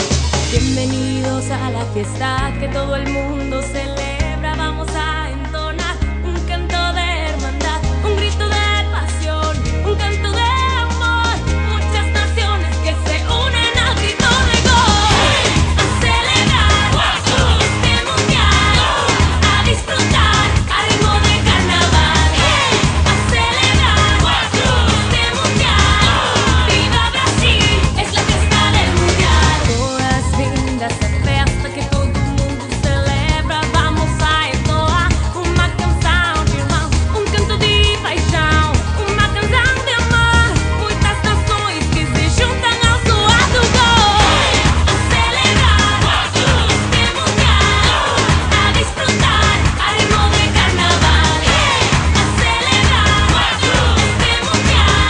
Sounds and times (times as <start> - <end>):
Music: 0.0 - 55.0.